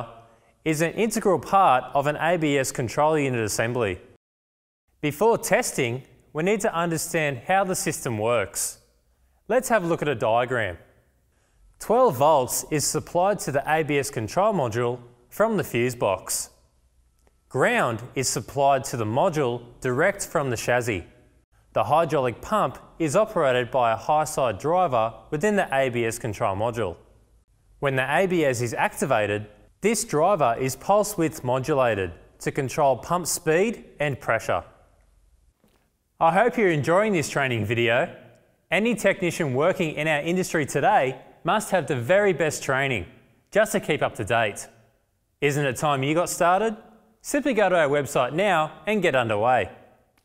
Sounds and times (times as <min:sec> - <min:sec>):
Speech: 0:00.0 - 0:04.2, 0:05.0 - 0:08.8, 0:09.5 - 0:10.9, 0:11.8 - 0:16.6, 0:17.5 - 0:27.0, 0:27.8 - 0:34.8, 0:36.2 - 0:44.8, 0:45.4 - 0:49.8.